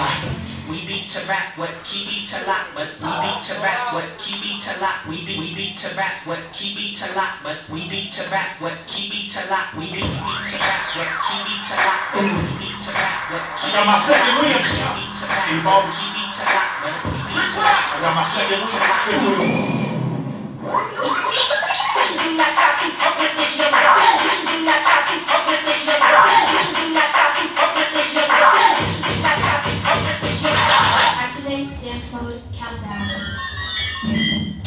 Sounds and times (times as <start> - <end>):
Music: 0.0 - 20.4, 21.4 - 34.6.